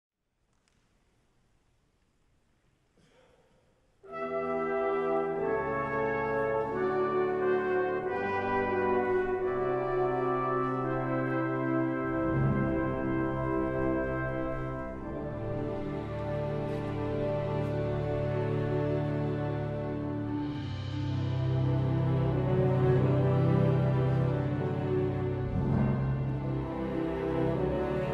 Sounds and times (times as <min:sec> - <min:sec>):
French horn: 0:04.0 - 0:28.1
Trumpet: 0:04.0 - 0:28.1.